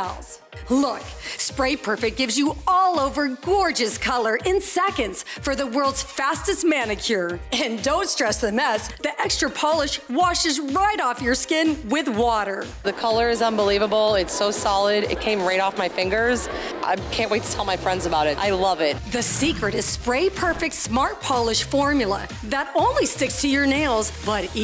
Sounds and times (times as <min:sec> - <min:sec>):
Music: 0:00.0 - 0:24.6
Speech: 0:00.0 - 0:24.6
Spray: 0:13.5 - 0:13.8, 0:23.7 - 0:24.6.